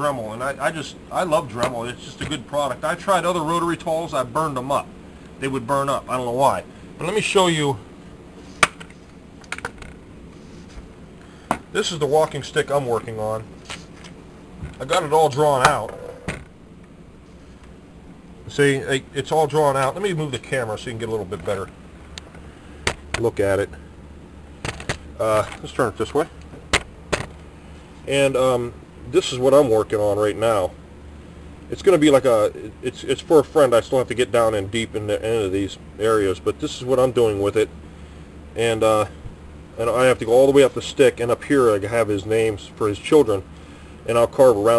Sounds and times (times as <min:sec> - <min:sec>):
Speech: 0:00.0 - 0:07.9, 0:11.8 - 0:13.5, 0:14.8 - 0:16.0, 0:18.5 - 0:21.7, 0:23.2 - 0:23.8, 0:25.2 - 0:26.4, 0:28.1 - 0:30.8, 0:31.7 - 0:37.7, 0:38.6 - 0:39.2, 0:39.8 - 0:43.5, 0:44.1 - 0:44.7.